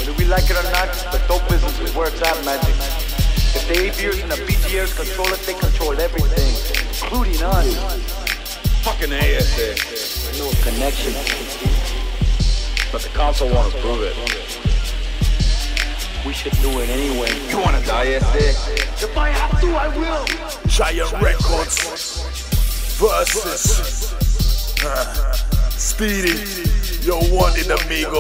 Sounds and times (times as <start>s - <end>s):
Hip hop music: 0.0s - 28.2s
Rapping: 0.0s - 28.2s.